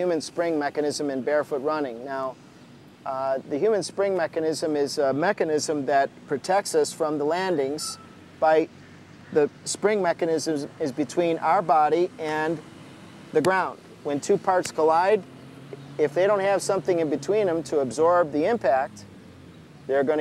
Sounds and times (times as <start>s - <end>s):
Speech: 0.0s - 2.4s, 3.1s - 8.7s, 9.3s - 12.6s, 13.4s - 15.2s, 16.0s - 19.0s, 19.9s - 20.2s.